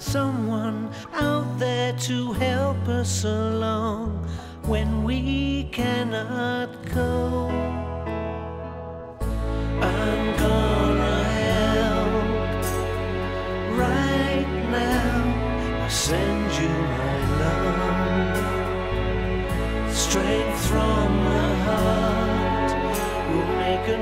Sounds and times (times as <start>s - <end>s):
Music: 0.0s - 24.0s.